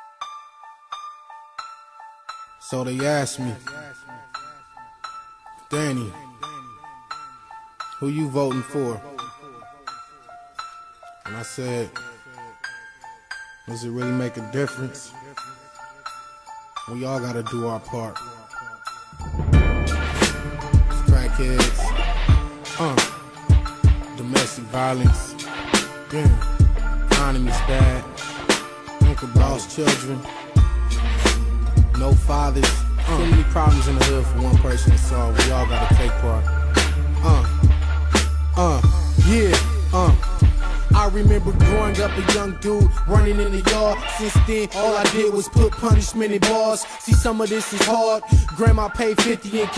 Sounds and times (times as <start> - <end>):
Soul music: 0.0 - 49.7.